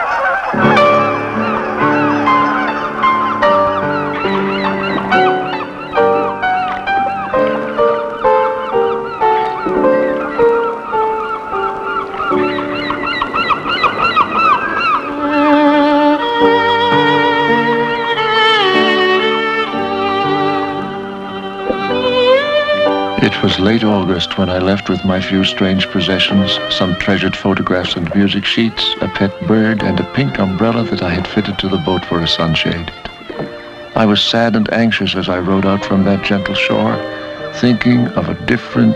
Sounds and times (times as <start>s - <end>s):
Violin, fiddle: 0.0s - 38.9s.